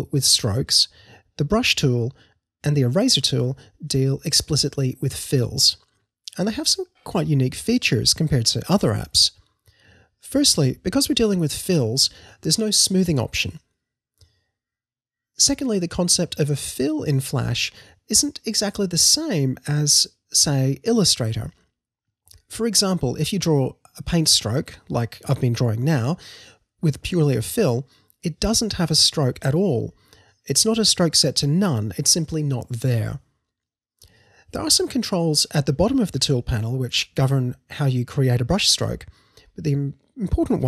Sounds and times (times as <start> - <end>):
Speech: 0.0 - 9.4, 10.2 - 13.6, 15.4 - 21.6, 22.4 - 33.2, 34.5 - 40.6.